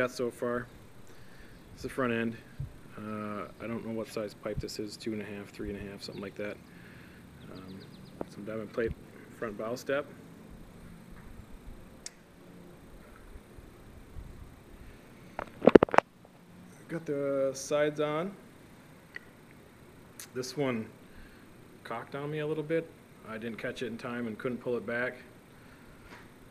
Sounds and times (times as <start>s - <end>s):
Speech: 0.0s - 0.7s, 1.8s - 6.6s, 7.4s - 10.2s, 16.8s - 18.4s, 20.2s - 21.0s, 21.8s - 25.3s.